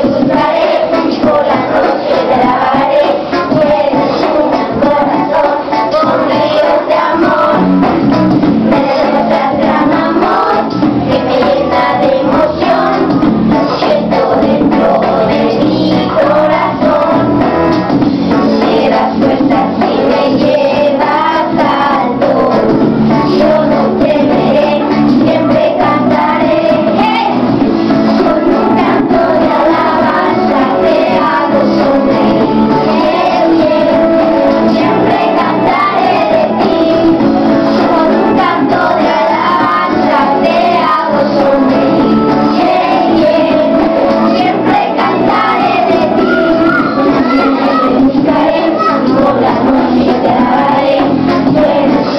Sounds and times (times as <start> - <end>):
Child singing: 0.0 - 7.7, 8.6 - 17.5, 18.3 - 52.1
Music: 0.0 - 52.1.